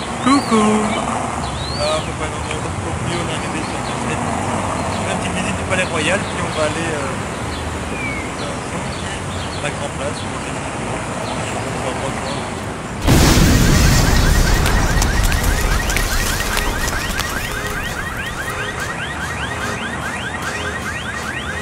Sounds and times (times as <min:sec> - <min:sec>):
Explosion: 0:13.0 - 0:18.9.